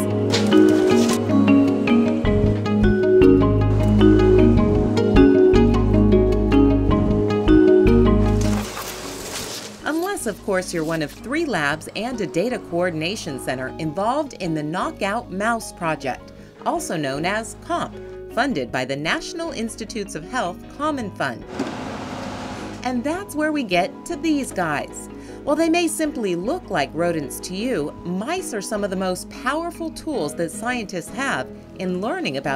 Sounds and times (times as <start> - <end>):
Music: 0.0 - 21.6, 22.6 - 32.5
Speech: 9.9 - 21.5, 22.8 - 32.5.